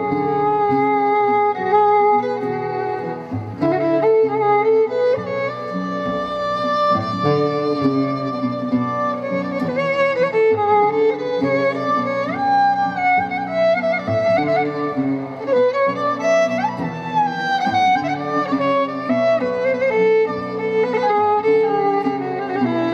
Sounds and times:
Violin, fiddle: 0.0s - 22.9s.

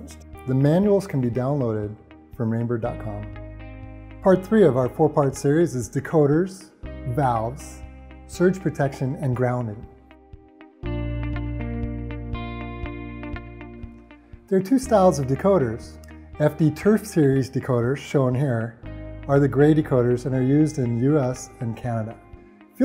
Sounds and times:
Speech: 0.0s - 3.3s, 4.2s - 9.9s, 14.5s - 22.2s
Music: 0.0s - 22.8s.

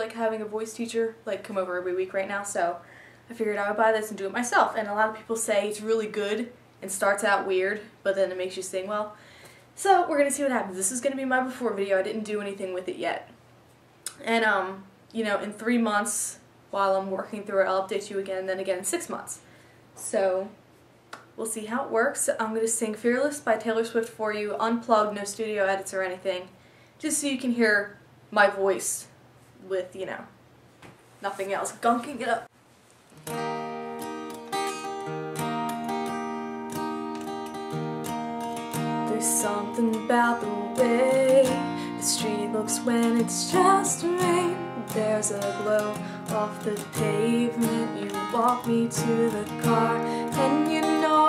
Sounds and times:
Speech: 0.0s - 9.2s, 9.8s - 13.4s, 14.1s - 19.4s, 20.0s - 20.6s, 21.4s - 30.4s, 31.2s - 32.5s.

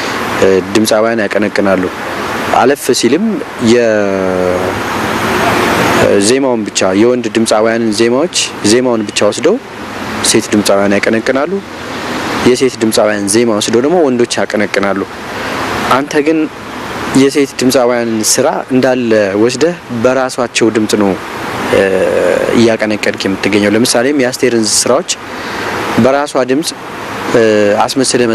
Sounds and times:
Speech: 0.4s - 4.8s, 6.0s - 9.6s, 10.2s - 11.6s, 12.4s - 15.1s, 15.9s - 16.5s, 17.2s - 25.2s, 26.0s - 28.3s.

